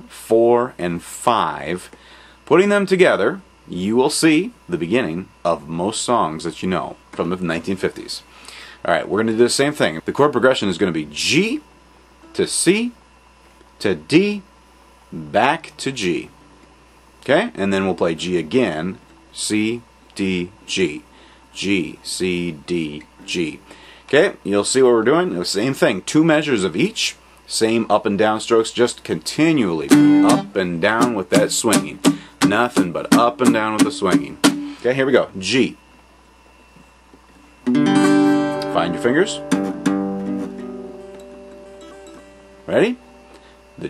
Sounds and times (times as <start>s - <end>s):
Speech: 0.0s - 11.7s, 12.3s - 13.0s, 13.8s - 14.5s, 15.1s - 16.4s, 17.2s - 35.8s, 38.6s - 39.4s, 42.7s - 43.0s.